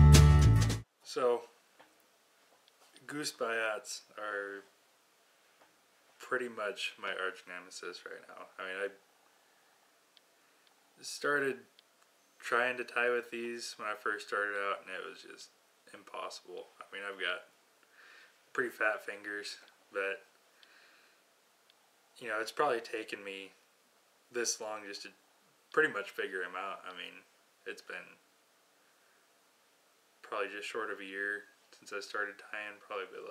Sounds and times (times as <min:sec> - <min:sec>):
Speech: 0:01.0 - 0:01.6, 0:03.0 - 0:04.7, 0:06.2 - 0:09.0, 0:11.0 - 0:11.7, 0:12.4 - 0:17.5, 0:18.5 - 0:20.3, 0:22.2 - 0:23.6, 0:24.3 - 0:28.2, 0:30.2 - 0:33.3.